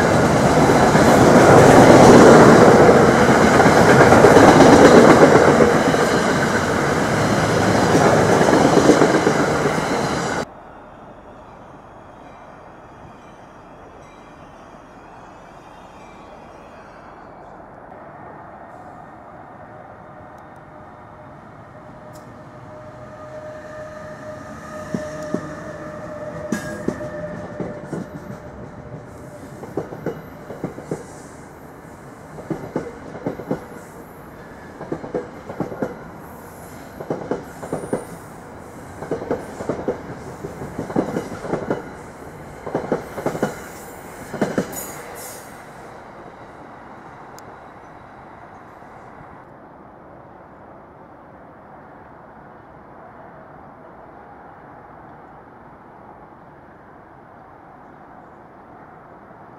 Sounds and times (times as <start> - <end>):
Subway, metro, underground: 0.0 - 59.5
Train: 0.0 - 59.5.